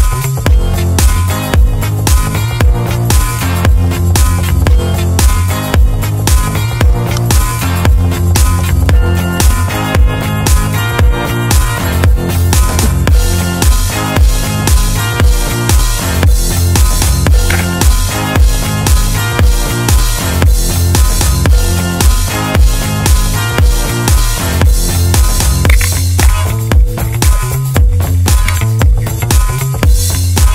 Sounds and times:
Music: 0.0s - 30.5s.

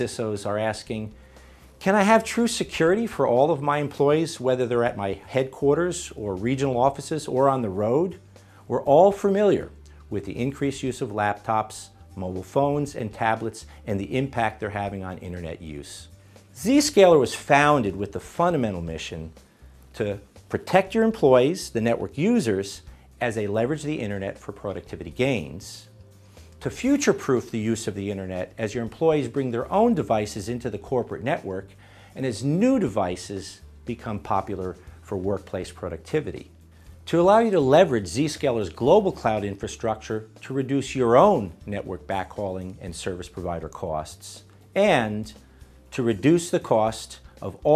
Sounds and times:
Speech: 0.0s - 1.2s, 1.8s - 25.9s, 26.6s - 36.5s, 37.1s - 47.7s
Music: 0.0s - 47.7s.

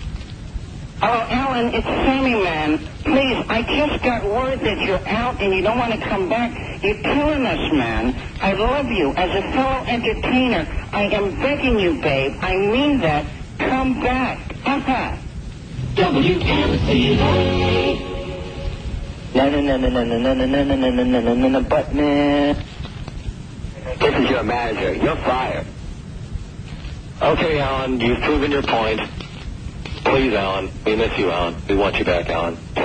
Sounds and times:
Speech: 1.0s - 15.2s, 23.8s - 25.7s, 27.2s - 29.1s, 30.0s - 32.8s
Radio: 1.0s - 26.0s, 26.7s - 32.8s
Music: 15.8s - 19.3s.

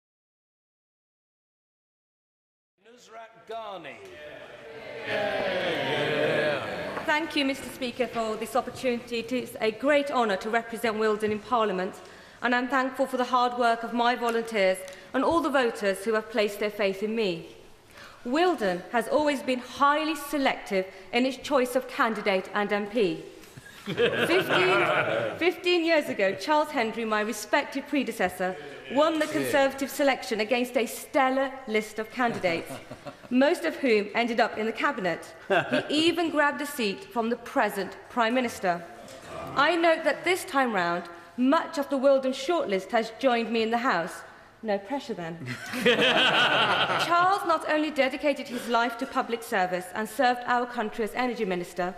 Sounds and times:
Narration, monologue: 2.8s - 51.9s
Female speech, woman speaking: 6.9s - 17.5s, 18.3s - 23.2s, 24.2s - 38.9s, 39.6s - 45.4s, 47.0s - 51.9s.

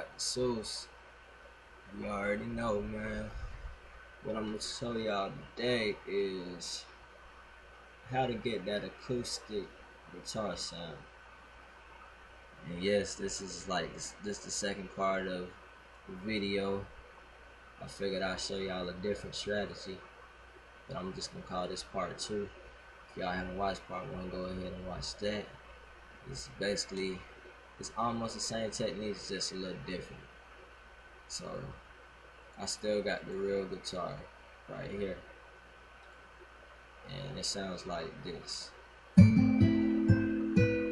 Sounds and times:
Speech: 0.0s - 0.9s, 1.9s - 3.6s, 4.2s - 6.9s, 8.1s - 11.0s, 12.6s - 16.9s, 17.8s - 20.0s, 20.9s - 22.5s, 23.2s - 25.6s, 26.2s - 30.3s, 31.3s - 31.8s, 32.6s - 35.2s, 37.1s - 38.8s.

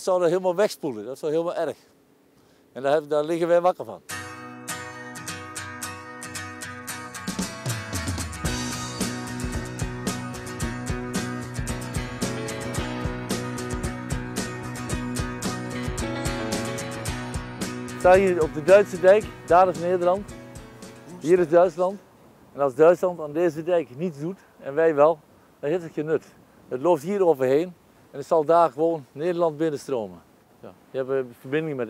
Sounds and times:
Music: 4.1s - 21.6s.

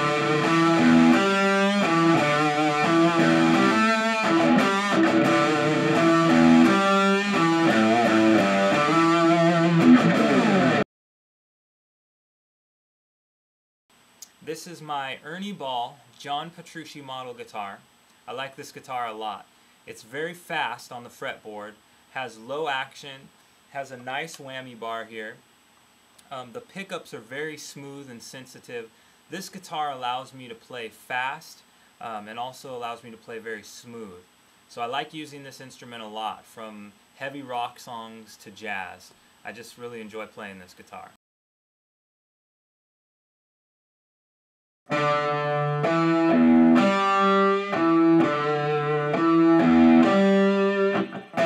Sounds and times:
Music: 0.0s - 10.8s, 44.9s - 51.4s
Speech: 14.3s - 25.4s, 26.2s - 41.2s.

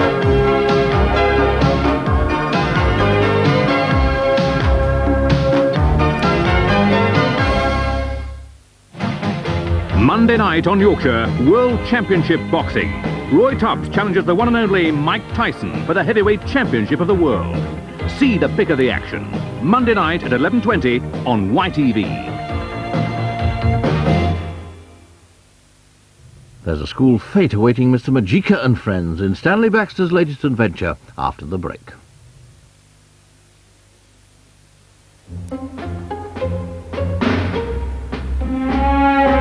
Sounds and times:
Music: 0.0s - 25.3s, 35.2s - 39.4s
Television: 0.0s - 39.4s
Speech: 9.9s - 22.4s, 26.6s - 32.1s.

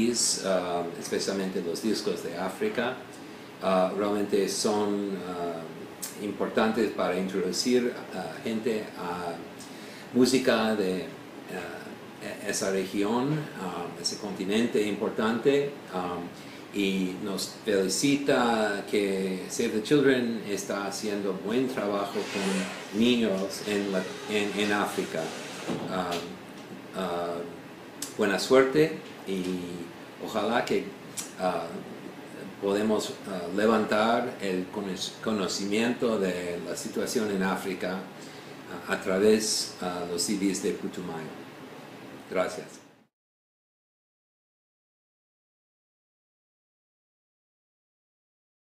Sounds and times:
Speech: 0.0s - 26.4s, 27.0s - 38.1s, 38.7s - 41.4s, 42.3s - 42.9s.

